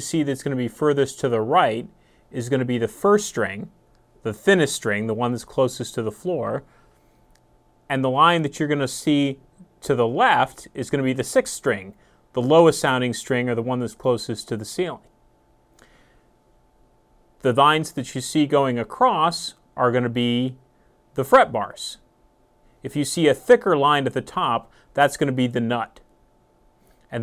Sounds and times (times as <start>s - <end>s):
Speech: 0.0s - 6.7s, 7.9s - 15.1s, 17.4s - 20.6s, 21.2s - 22.1s, 22.8s - 26.1s.